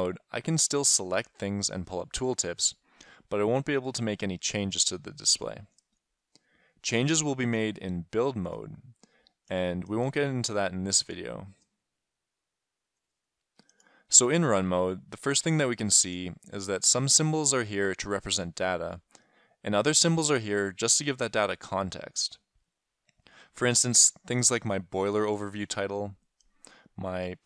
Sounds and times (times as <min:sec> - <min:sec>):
Speech: 0:00.0 - 0:05.7, 0:06.8 - 0:11.6, 0:14.1 - 0:19.1, 0:19.7 - 0:22.4, 0:23.6 - 0:26.2, 0:27.0 - 0:27.4.